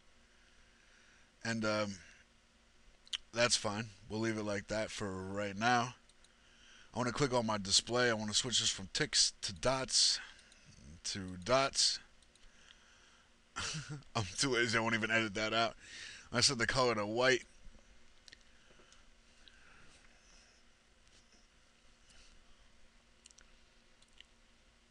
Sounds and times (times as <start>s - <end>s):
Speech: 1.4s - 2.1s, 3.2s - 6.0s, 7.0s - 12.1s, 14.2s - 17.5s.